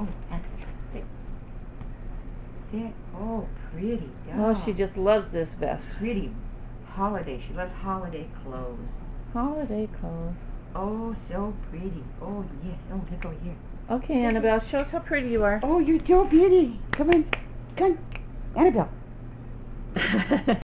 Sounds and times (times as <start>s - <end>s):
Speech: 2.7s - 18.9s.